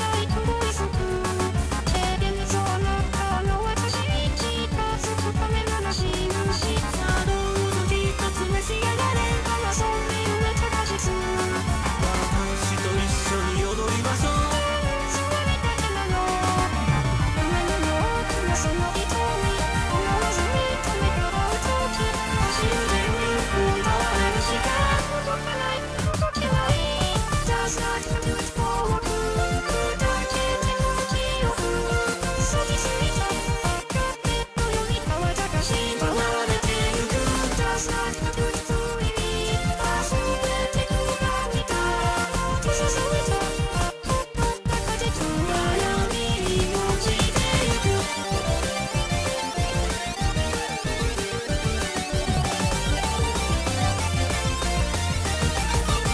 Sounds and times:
Music: 0.0 - 56.1.

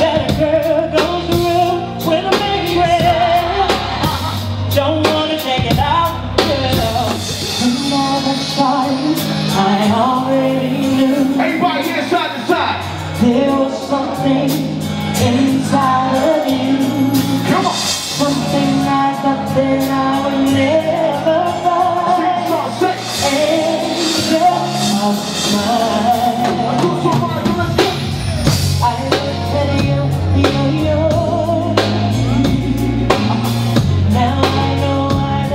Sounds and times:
Female singing: 0.0 - 11.4, 13.2 - 17.4, 18.2 - 22.6, 28.8 - 33.4, 34.0 - 35.5
Male singing: 0.0 - 12.5, 13.2 - 28.1, 28.7 - 35.5
Music: 0.0 - 35.5.

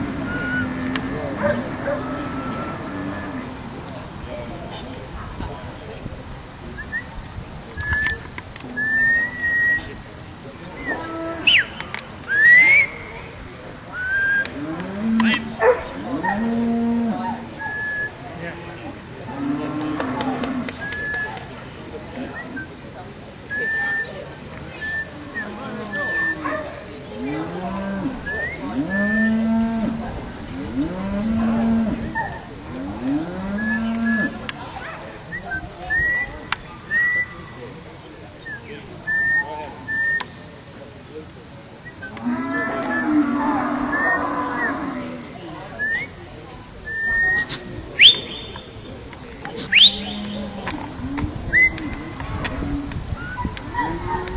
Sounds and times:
Speech: 0.0 - 54.3.

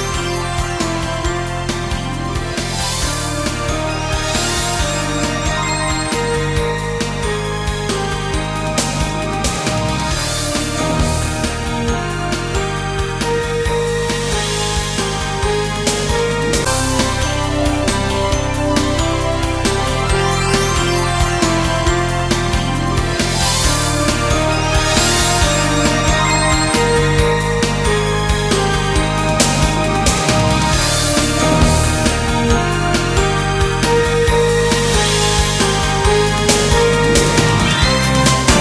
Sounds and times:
Rhythm and blues: 14.1 - 38.6.

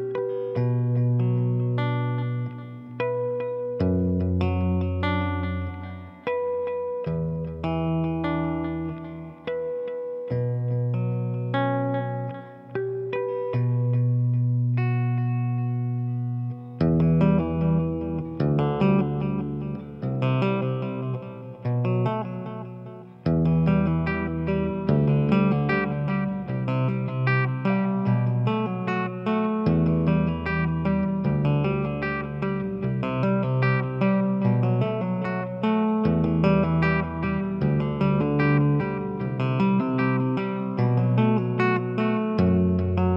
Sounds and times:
Music: 0.0 - 43.1.

